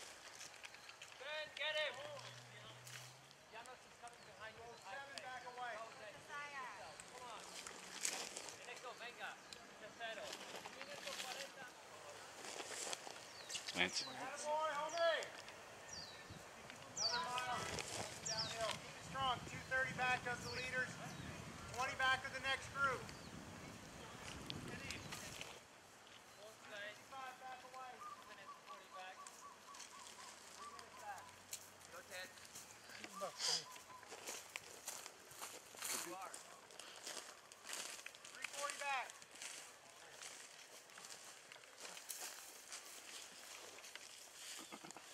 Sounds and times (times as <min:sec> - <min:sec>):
Outside, rural or natural: 0:00.0 - 0:45.1
Speech: 0:13.7 - 0:15.4, 0:16.7 - 0:23.0, 0:38.3 - 0:39.2.